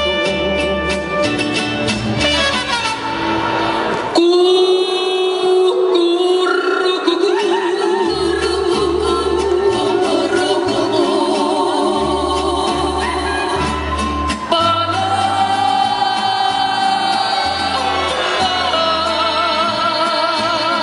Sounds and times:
Music of Latin America: 0.0 - 20.8.

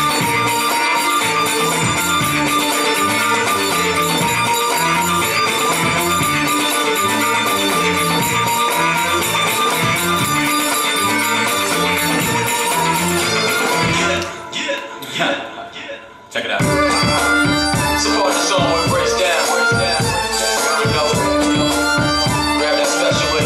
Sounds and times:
Music: 0.0 - 23.4
Speech: 14.0 - 16.7.

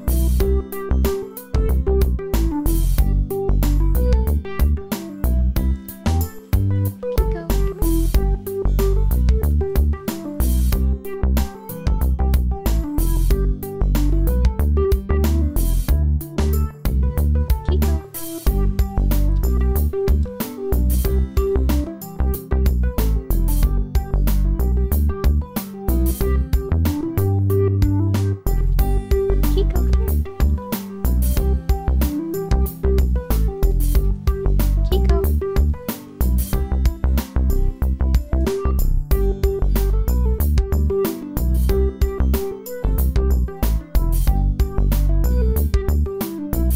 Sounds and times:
Music: 0.0 - 46.7.

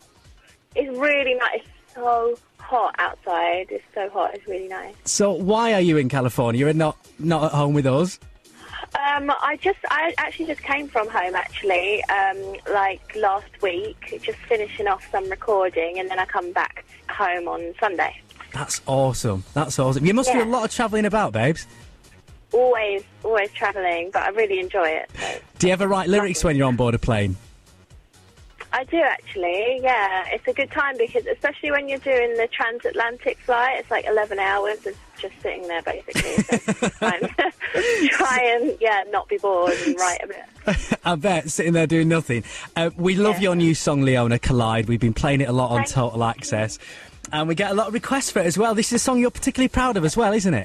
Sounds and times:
Music: 0.0 - 50.6
Speech: 0.8 - 21.6, 22.6 - 27.4, 28.6 - 50.6.

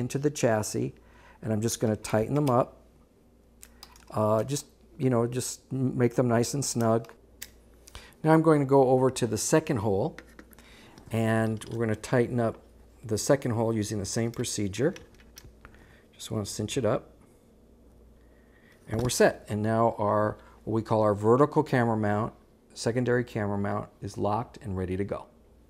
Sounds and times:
Speech: 0.0 - 2.8, 4.1 - 7.2, 8.2 - 10.2, 11.1 - 15.0, 16.2 - 17.2, 18.9 - 25.4.

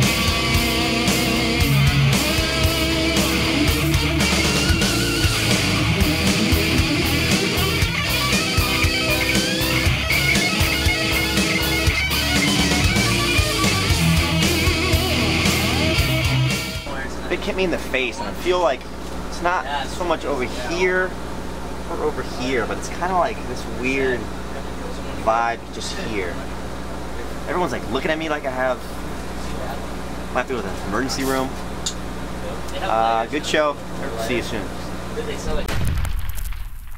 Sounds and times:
Music: 0.0 - 16.9
Speech: 16.9 - 21.2, 21.9 - 31.6, 32.4 - 35.7.

